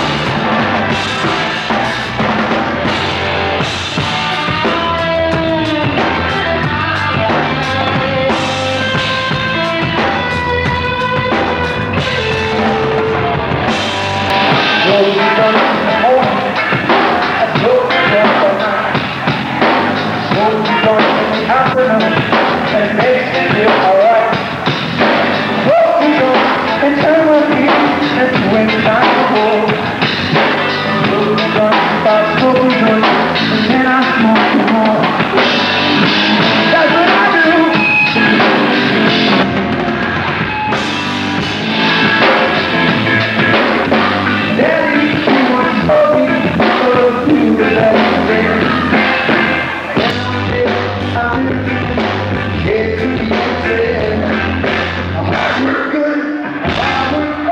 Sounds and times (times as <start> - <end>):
Music: 0.0 - 57.5.